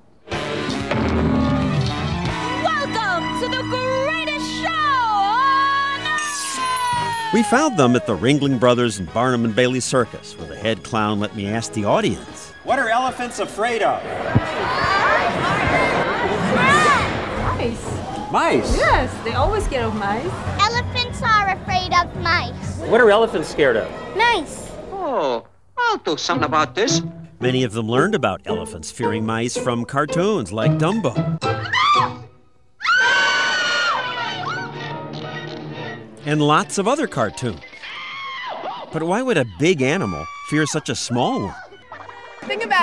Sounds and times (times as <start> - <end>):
Music: 0.2 - 25.0, 25.8 - 32.7, 33.8 - 38.2, 38.9 - 42.8.